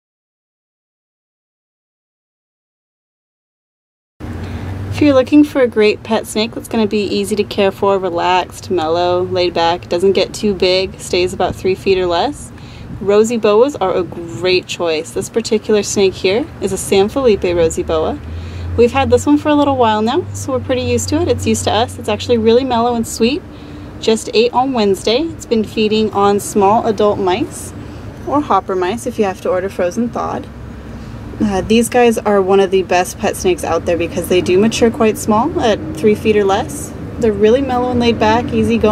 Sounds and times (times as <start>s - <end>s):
Speech: 4.9s - 18.2s, 18.8s - 23.4s, 24.0s - 30.5s, 31.4s - 38.9s.